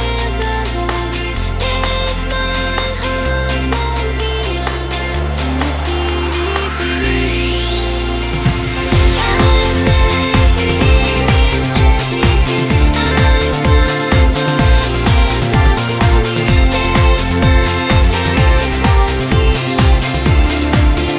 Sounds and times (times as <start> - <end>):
Music: 0.0 - 21.1.